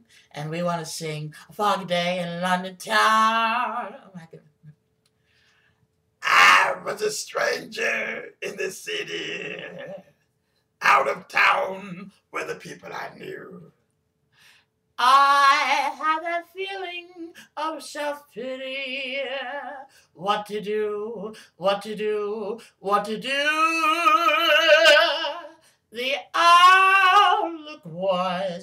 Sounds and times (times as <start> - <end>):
Male singing: 0.4 - 4.2, 10.8 - 13.6, 15.0 - 28.6.